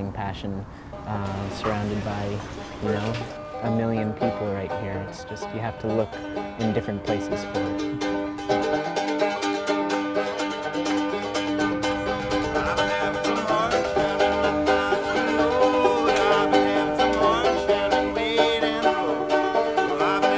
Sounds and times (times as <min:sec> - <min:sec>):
Speech: 0:00.0 - 0:07.8
Music: 0:00.9 - 0:20.3.